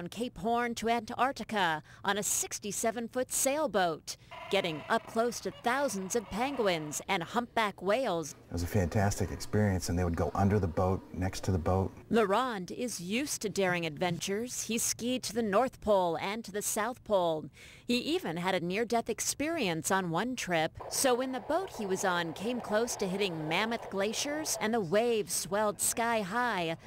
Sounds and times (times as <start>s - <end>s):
Speech: 0.0s - 26.8s.